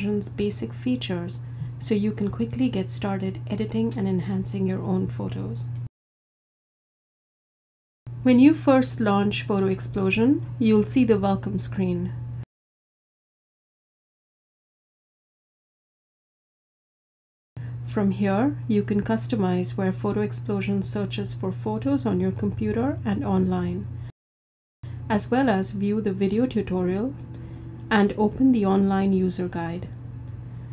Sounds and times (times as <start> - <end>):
Speech: 0.0 - 5.7, 8.2 - 12.2, 17.9 - 23.9, 25.1 - 27.2, 27.9 - 30.0.